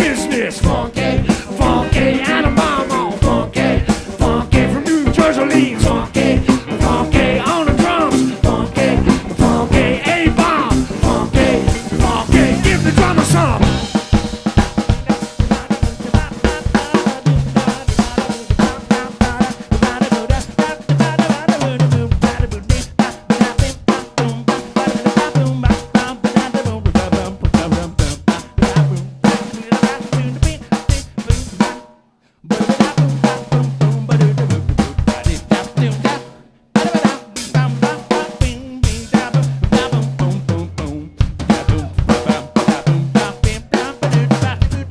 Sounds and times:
Singing: 0.0s - 13.8s, 14.9s - 31.8s, 32.5s - 44.9s
Guitar: 0.0s - 29.6s, 32.6s - 44.9s
Snare drum: 0.0s - 31.9s, 32.5s - 44.9s.

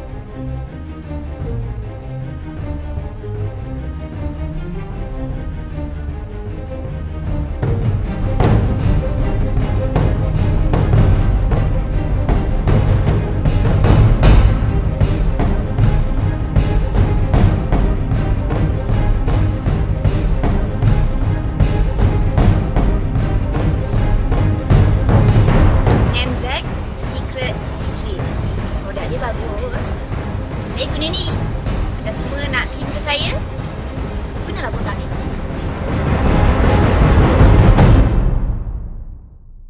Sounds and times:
Music: 0.0s - 39.6s
Speech: 26.2s - 30.0s, 30.7s - 31.4s, 32.1s - 33.4s, 34.5s - 35.1s.

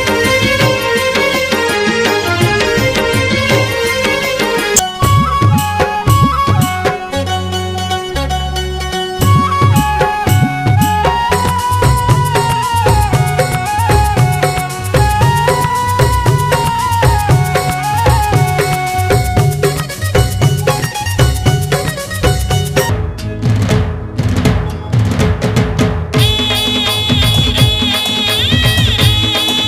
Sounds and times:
Folk music: 0.0s - 25.1s, 26.2s - 29.6s.

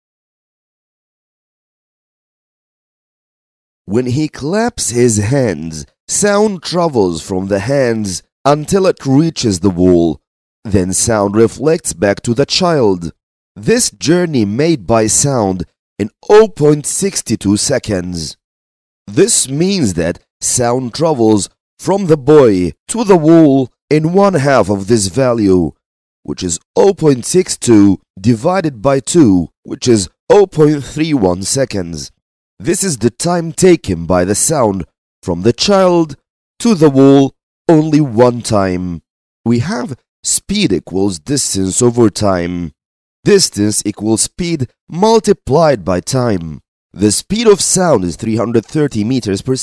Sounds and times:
Speech synthesizer: 3.9s - 18.4s, 19.1s - 49.6s.

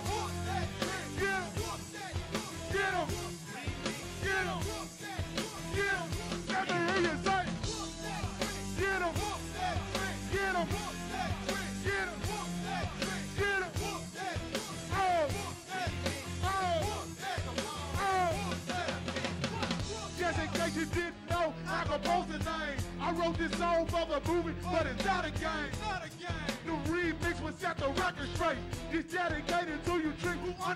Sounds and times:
Music: 0.0s - 30.7s.

